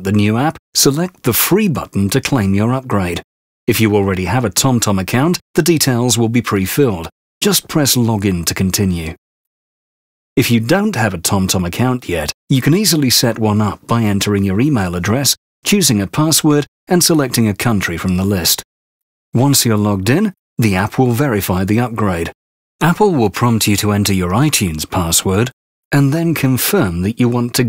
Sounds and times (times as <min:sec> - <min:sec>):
Speech synthesizer: 0:00.0 - 0:09.2, 0:10.4 - 0:18.6, 0:19.4 - 0:27.6.